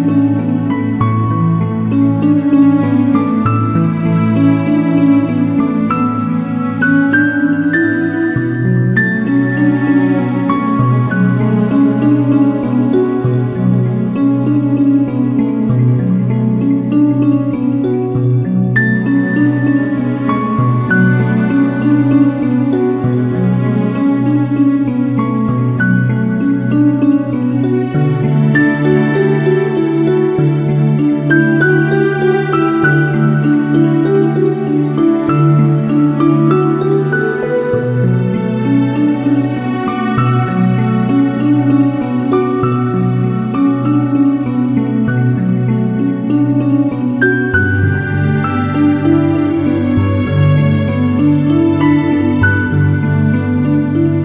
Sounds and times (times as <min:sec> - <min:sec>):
New-age music: 0:00.0 - 0:54.2.